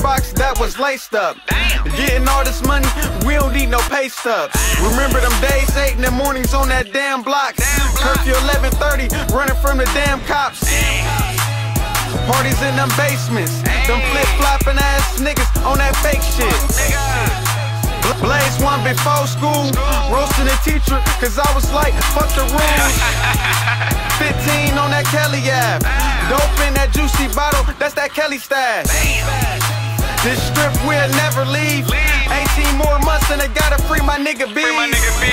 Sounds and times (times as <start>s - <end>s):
Rhythm and blues: 0.0s - 35.3s.